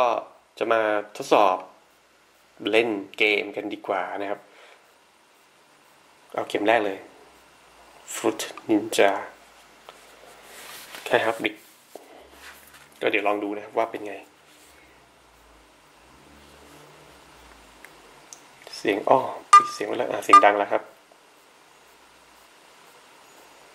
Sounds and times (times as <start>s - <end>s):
Speech: 0.0s - 1.8s, 2.6s - 4.5s, 6.3s - 7.1s, 8.1s - 9.4s, 11.0s - 11.7s, 13.0s - 14.3s, 18.7s - 21.0s
Inside, small room: 0.0s - 23.7s.